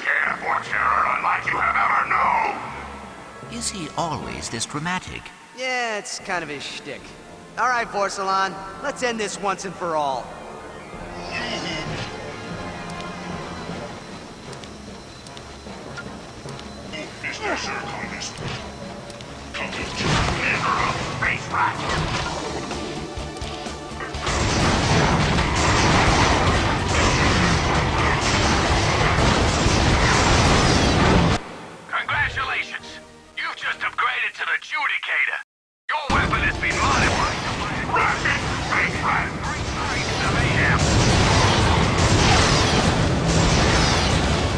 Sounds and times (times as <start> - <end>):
Music: 0.0 - 35.4, 36.0 - 44.5.